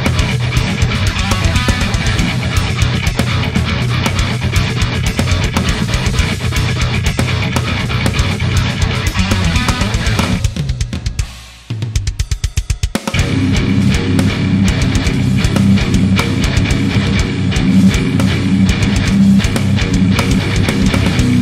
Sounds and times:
Guitar: 0.0s - 10.8s, 13.1s - 21.4s.

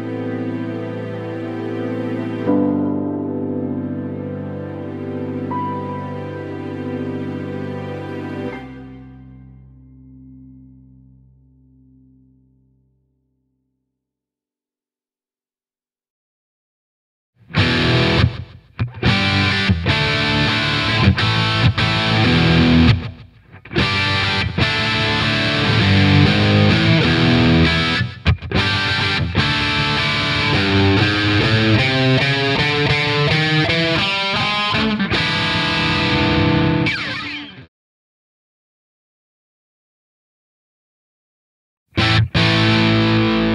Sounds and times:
Bass guitar: 8.7s - 13.5s, 17.4s - 37.5s, 41.9s - 43.5s
Electric guitar: 17.4s - 37.7s, 42.0s - 43.5s.

